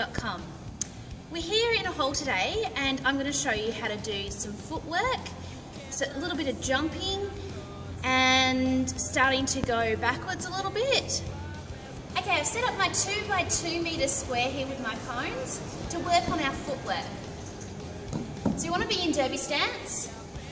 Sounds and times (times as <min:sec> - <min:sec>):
Music: 0:00.0 - 0:20.5
Speech: 0:01.3 - 0:05.3, 0:12.2 - 0:17.2.